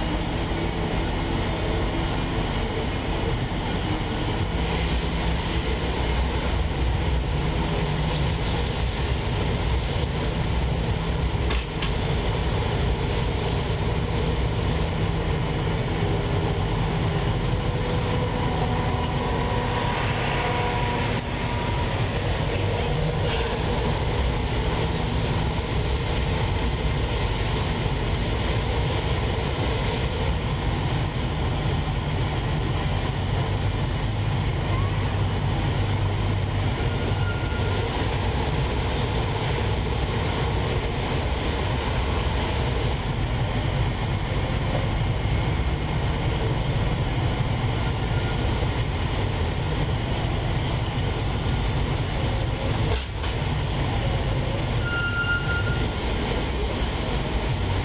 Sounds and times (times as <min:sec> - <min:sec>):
Vehicle: 0:00.0 - 0:57.8.